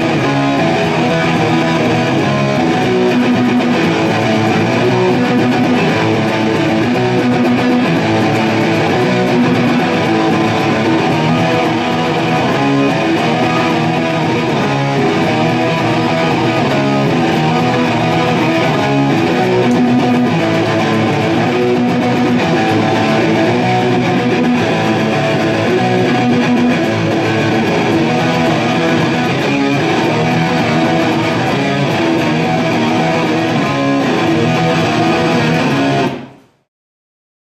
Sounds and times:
Electric guitar: 0.0 - 36.7.

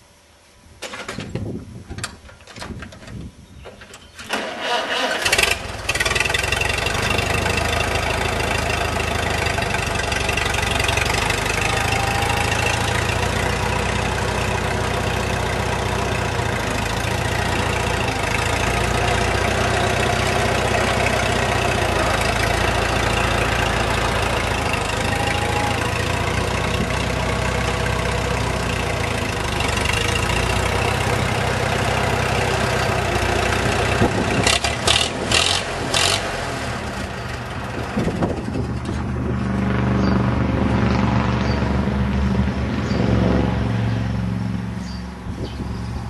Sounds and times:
Vehicle: 0.8 - 46.0
Idling: 4.5 - 40.2.

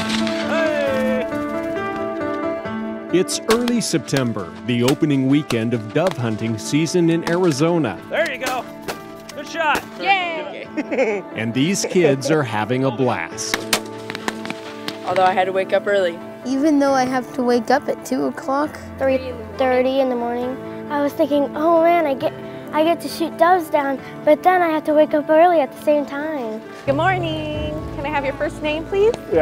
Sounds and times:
Music: 0.0 - 29.4.

